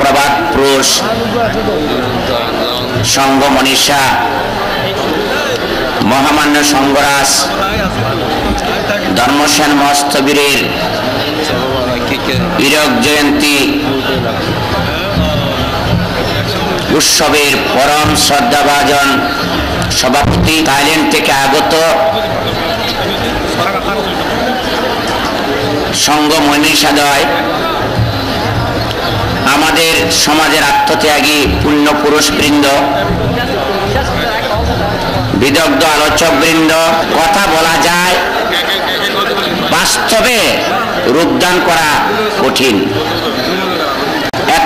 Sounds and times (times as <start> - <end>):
Male speech, man speaking: 0.0 - 28.1, 29.2 - 44.6
Narration, monologue: 0.0 - 44.6.